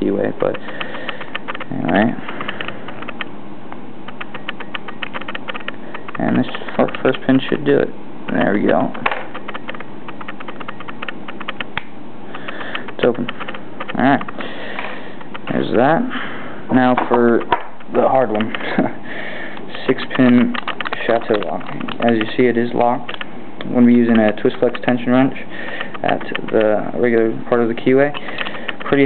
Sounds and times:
Speech: 0:00.0 - 0:00.6, 0:01.7 - 0:02.2, 0:06.2 - 0:09.0, 0:13.0 - 0:13.3, 0:13.9 - 0:14.3, 0:15.5 - 0:16.1, 0:16.7 - 0:18.9, 0:19.7 - 0:25.4, 0:26.0 - 0:28.2, 0:28.8 - 0:29.0.

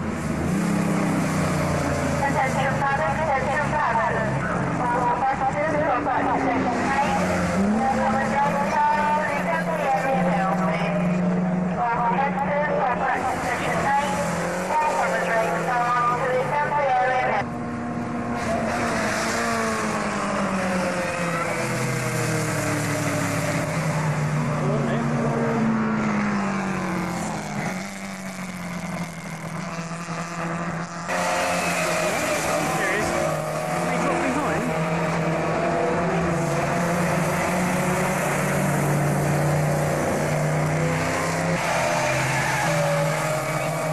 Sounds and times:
Speech: 0:02.2 - 0:11.0, 0:11.8 - 0:17.4, 0:32.6 - 0:33.2, 0:33.9 - 0:34.7.

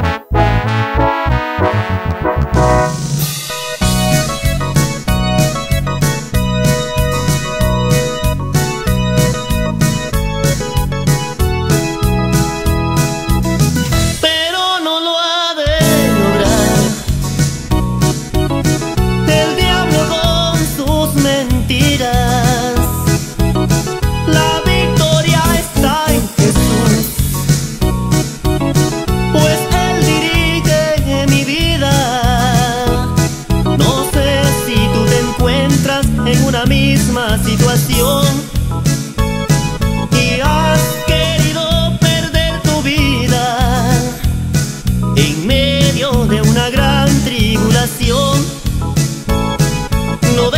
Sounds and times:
Music: 0:00.0 - 0:50.5.

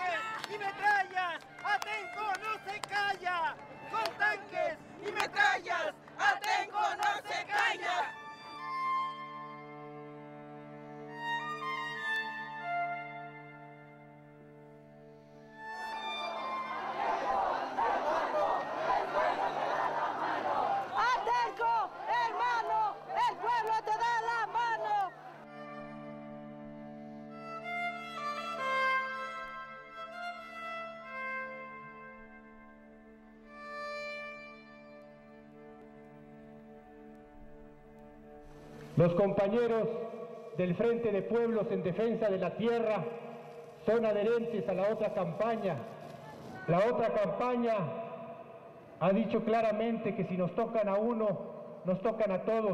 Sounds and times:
Music: 0:00.0 - 0:52.7.

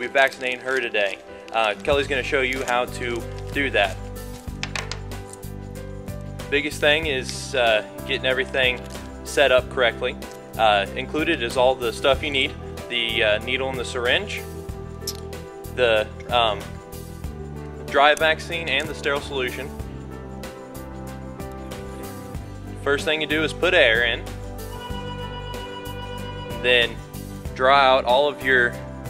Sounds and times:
Speech: 0:00.0 - 0:04.0, 0:06.5 - 0:14.4, 0:15.8 - 0:16.7, 0:17.9 - 0:19.7, 0:22.8 - 0:24.2, 0:26.6 - 0:27.0, 0:27.6 - 0:28.8
Music: 0:00.0 - 0:29.0.

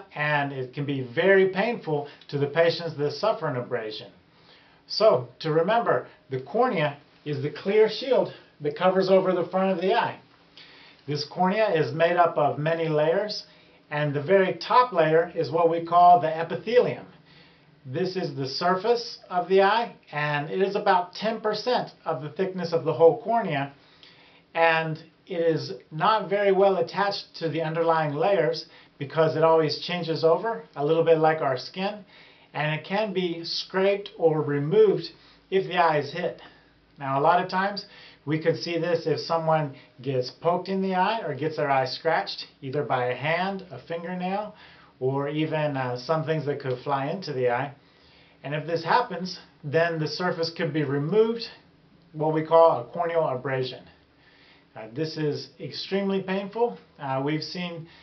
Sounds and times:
Speech: 0:00.0 - 0:04.2, 0:04.9 - 0:10.2, 0:11.1 - 0:17.2, 0:17.8 - 0:23.8, 0:24.5 - 0:47.8, 0:48.4 - 0:54.0, 0:54.8 - 0:57.9.

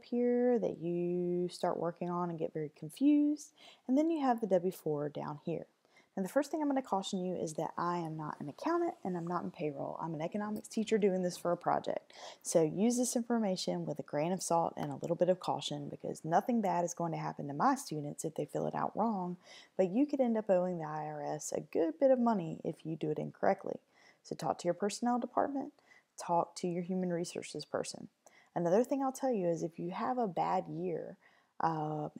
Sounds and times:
Speech: 0:00.0 - 0:32.1.

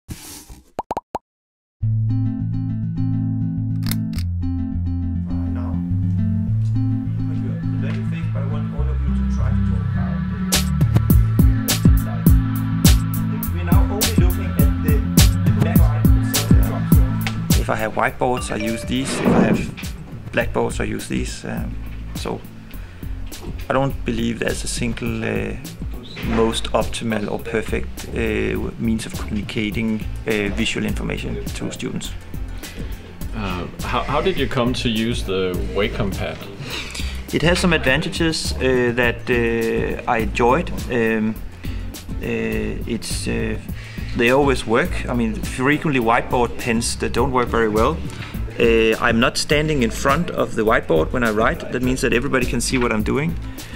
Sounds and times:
Music: 0:01.8 - 0:53.7
Speech: 0:07.2 - 0:10.2, 0:13.4 - 0:19.7, 0:20.3 - 0:22.5, 0:23.7 - 0:32.2, 0:33.4 - 0:36.5, 0:37.3 - 0:41.4, 0:42.2 - 0:43.6, 0:44.2 - 0:48.0, 0:48.6 - 0:53.4.

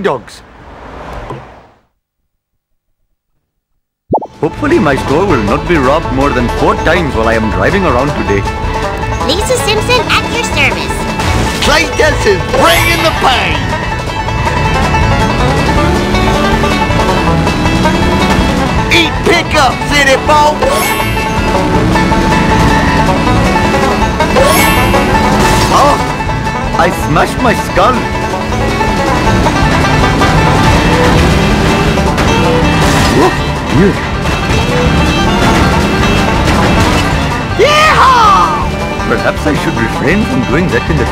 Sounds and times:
Music: 0:04.3 - 0:41.1.

